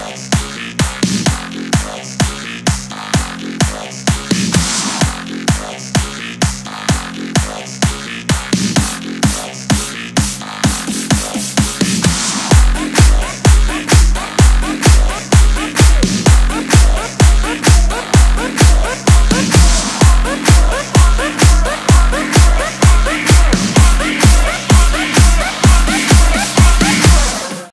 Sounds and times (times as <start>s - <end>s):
Music: 0.0s - 27.7s.